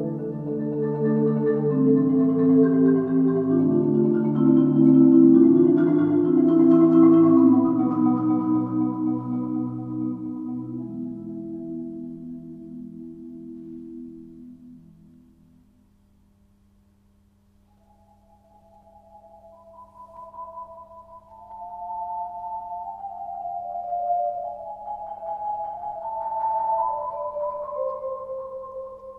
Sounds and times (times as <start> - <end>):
Marimba, xylophone: 0.0 - 14.6, 17.8 - 29.1
Glockenspiel: 0.0 - 15.4, 17.7 - 29.1.